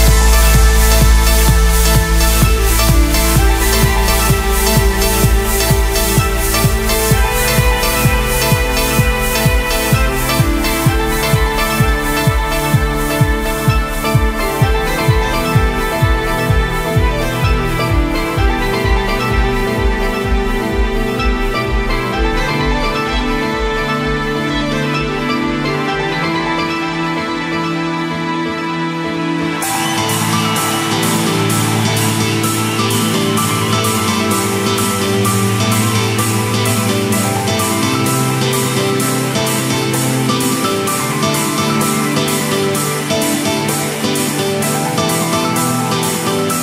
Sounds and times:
Theme music: 0.0s - 46.6s.

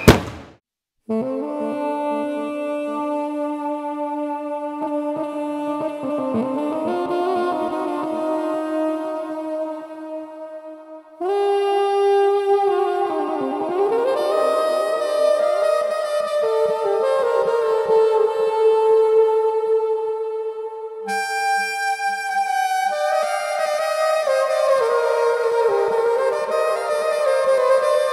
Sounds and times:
Wind instrument, woodwind instrument: 1.1s - 28.1s.

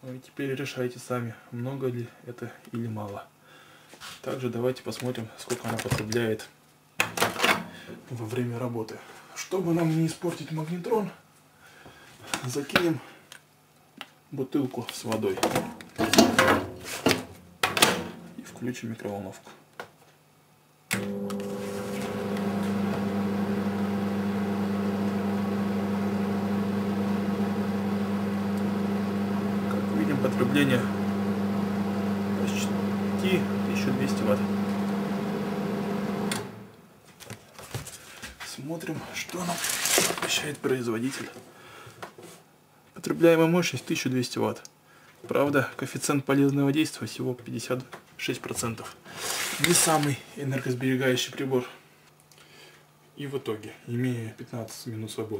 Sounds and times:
Speech: 0.0s - 3.3s, 4.2s - 6.6s, 8.1s - 11.2s, 12.4s - 13.1s, 14.3s - 15.6s, 18.4s - 19.6s, 29.7s - 31.0s, 32.4s - 34.6s, 38.4s - 41.4s, 43.0s - 49.0s, 49.6s - 51.8s, 53.2s - 55.3s.

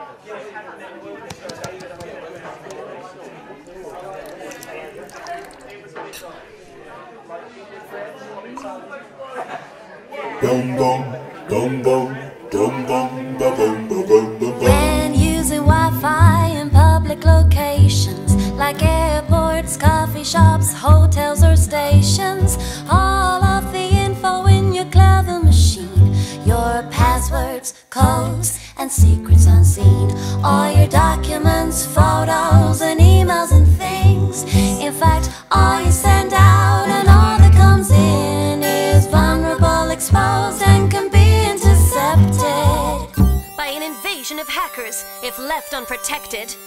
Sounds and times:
Music: 13.4s - 46.6s
Female singing: 14.5s - 43.8s.

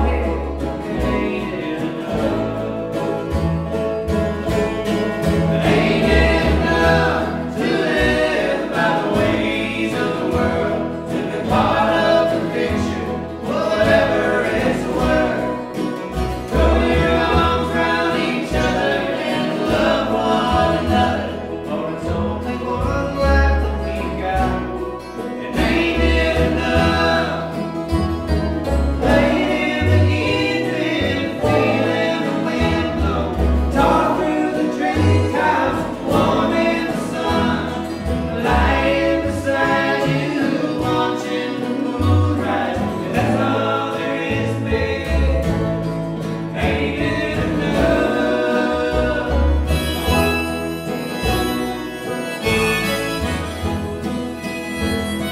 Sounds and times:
Music: 0.0s - 55.3s.

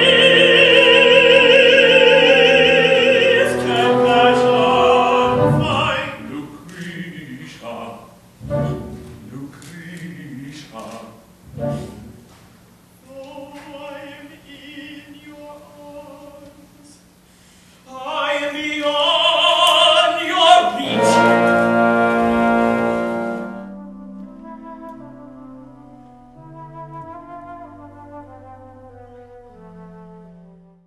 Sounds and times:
Opera: 0.0s - 30.8s.

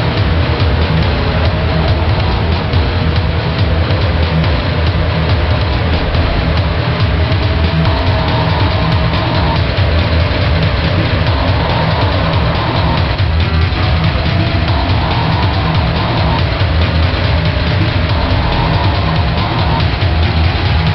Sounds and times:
Music: 0.0s - 20.9s
Vehicle: 0.0s - 20.9s.

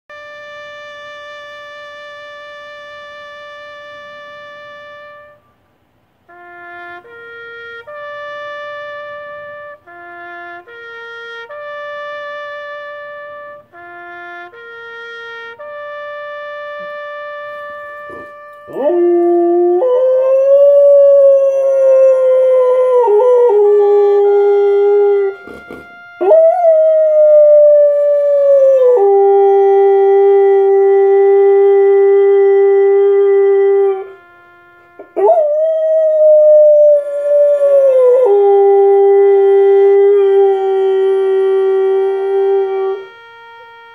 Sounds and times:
Howl: 18.1s - 25.5s, 26.2s - 34.2s, 35.1s - 43.1s.

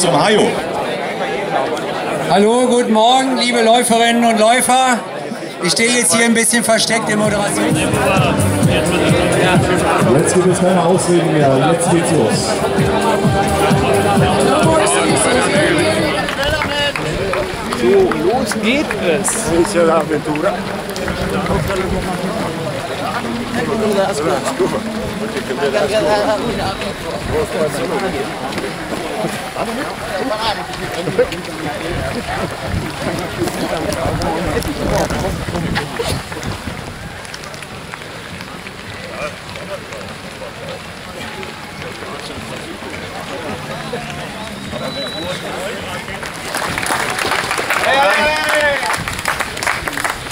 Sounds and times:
Speech: 0.0s - 36.2s
Run: 0.0s - 50.3s.

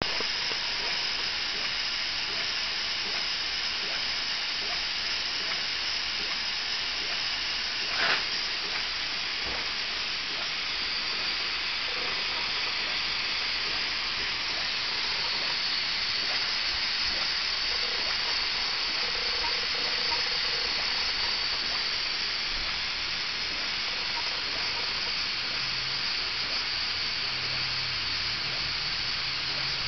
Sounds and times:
Engine: 0.0s - 29.8s.

